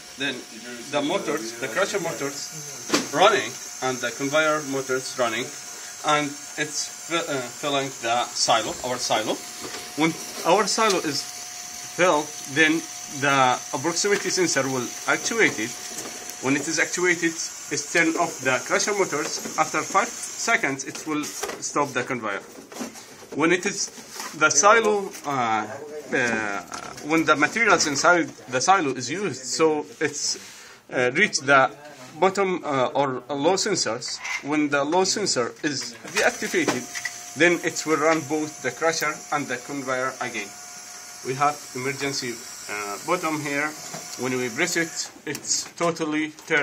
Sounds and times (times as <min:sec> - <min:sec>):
Speech: 0:00.2 - 0:09.4, 0:10.0 - 0:11.2, 0:12.0 - 0:15.7, 0:16.4 - 0:22.4, 0:23.4 - 0:40.5, 0:41.3 - 0:46.6.